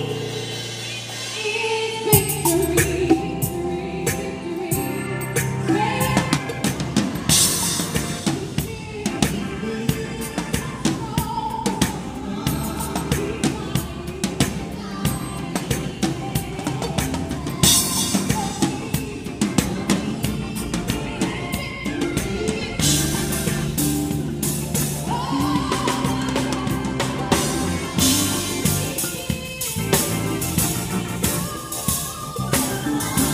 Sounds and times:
Gospel music: 0.0 - 33.3.

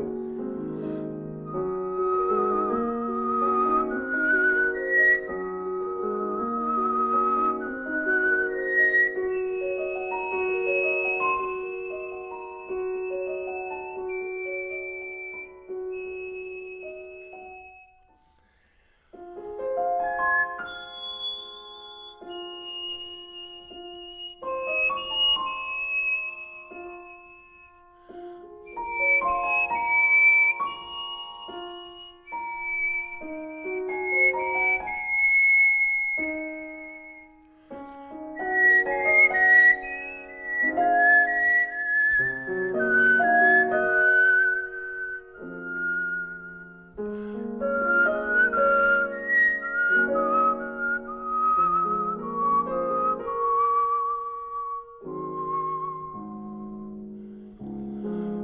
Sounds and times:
Whistling: 0.0 - 19.2, 19.8 - 58.4.

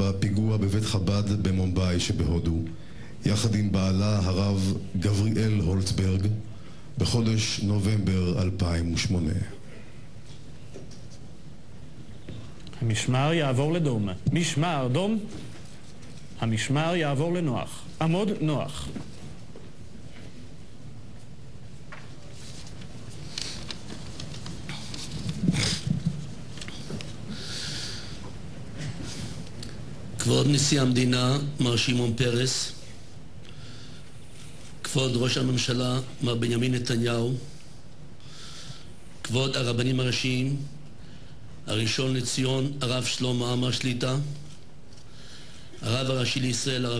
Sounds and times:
Male speech, man speaking: 0.0 - 6.4, 7.0 - 9.6, 12.8 - 15.4, 16.4 - 19.0, 30.2 - 32.8, 34.9 - 37.5, 39.3 - 40.7, 41.7 - 44.4, 45.8 - 46.9.

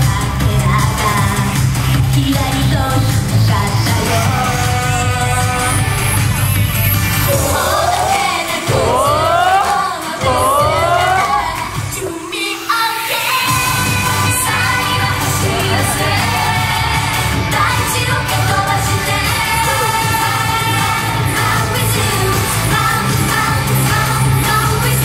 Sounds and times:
Music: 0.0 - 25.0.

